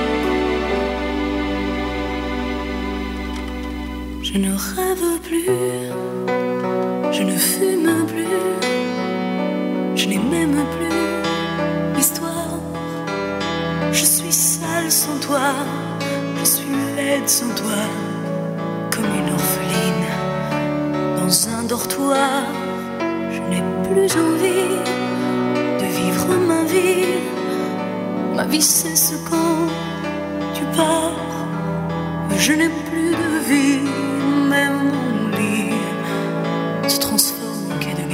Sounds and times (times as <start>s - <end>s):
Music: 0.0s - 38.1s.